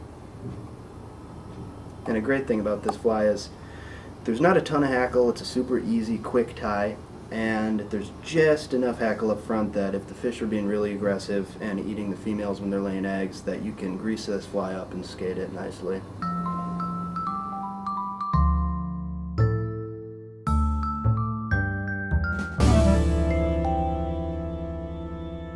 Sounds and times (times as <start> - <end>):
Speech: 2.1 - 3.6, 4.2 - 16.1
Music: 16.2 - 25.5.